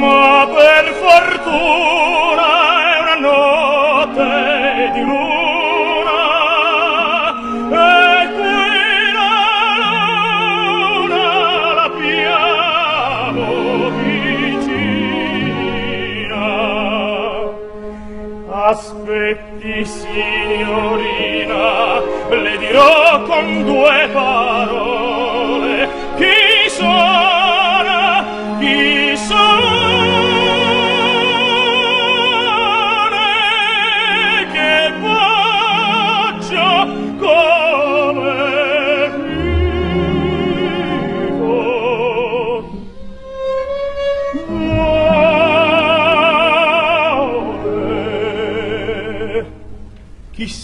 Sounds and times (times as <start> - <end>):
Music: 0.0 - 50.6.